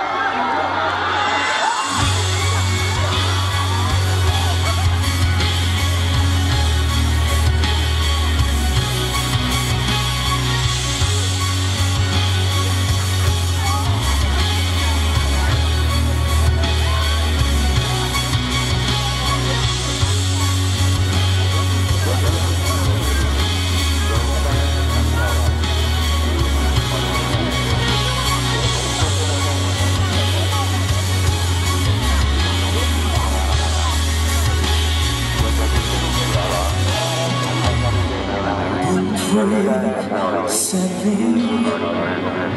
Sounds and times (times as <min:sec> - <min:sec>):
Music: 0:00.0 - 0:42.5
Speech: 0:00.0 - 0:42.5.